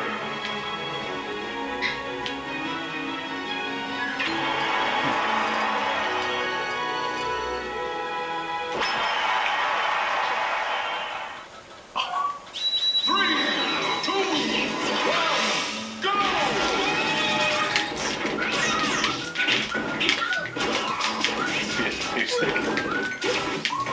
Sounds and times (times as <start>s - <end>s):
Music: 0.0s - 10.8s, 13.1s - 23.9s
Smash, crash: 14.5s - 23.9s.